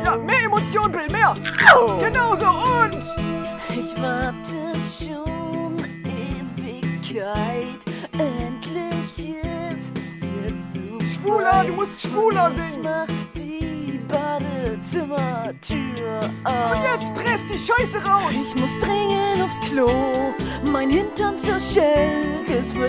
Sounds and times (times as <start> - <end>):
Speech: 0.0 - 3.1, 4.0 - 19.8
Music: 0.0 - 22.8.